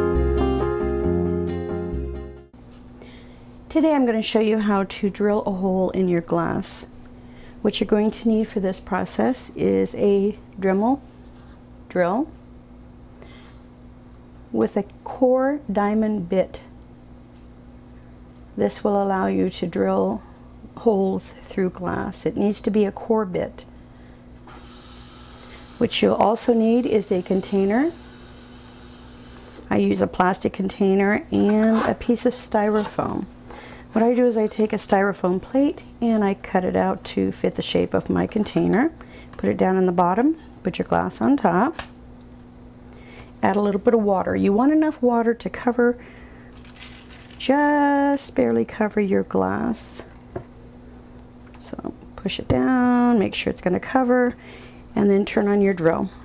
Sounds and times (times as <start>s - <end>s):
Speech: 3.7s - 6.9s, 7.6s - 11.0s, 11.9s - 12.4s, 14.5s - 16.7s, 18.6s - 23.7s, 25.8s - 28.0s, 29.7s - 33.3s, 33.9s - 41.8s, 43.4s - 46.0s, 47.4s - 50.1s, 51.6s - 54.4s, 55.0s - 56.2s.